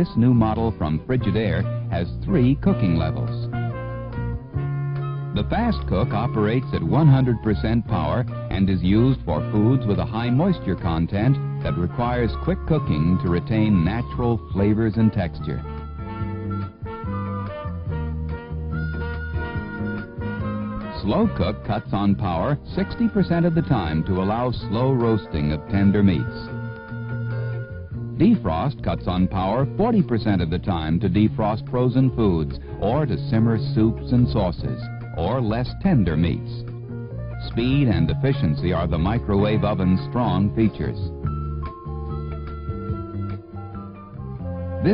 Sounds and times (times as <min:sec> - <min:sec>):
Speech: 0:00.0 - 0:03.5, 0:05.4 - 0:15.7, 0:21.0 - 0:26.5, 0:28.2 - 0:36.6, 0:37.4 - 0:41.1
Music: 0:00.0 - 0:44.9.